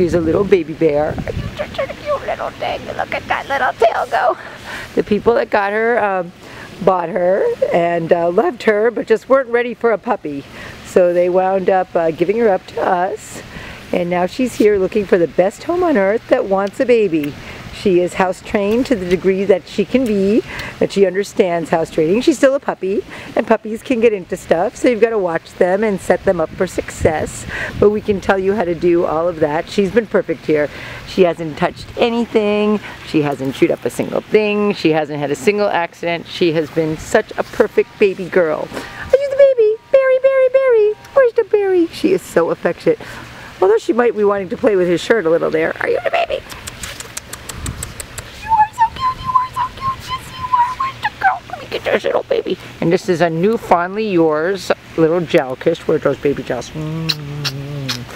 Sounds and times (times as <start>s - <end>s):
Speech: 0.0s - 4.4s, 5.0s - 43.0s, 43.6s - 46.6s, 48.6s - 58.1s.